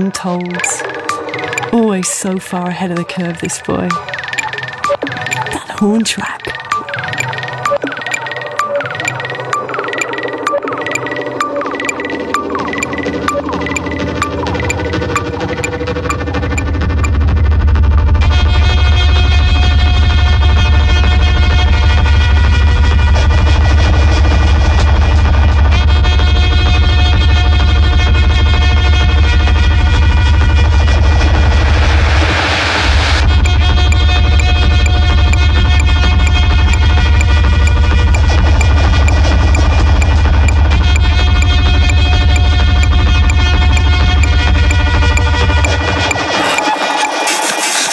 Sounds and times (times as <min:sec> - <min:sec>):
Speech: 0:00.0 - 0:00.8, 0:01.7 - 0:04.0, 0:05.4 - 0:06.6
Music: 0:00.0 - 0:47.9.